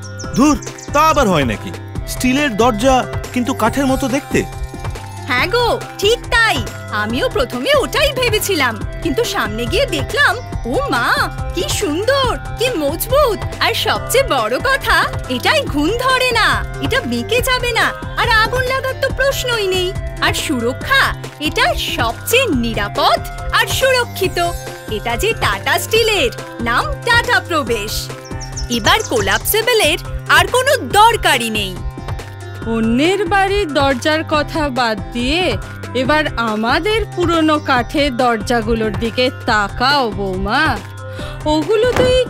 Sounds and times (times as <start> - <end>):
Music: 0.0 - 42.2
Speech: 0.4 - 4.5, 5.3 - 28.1, 28.7 - 31.8.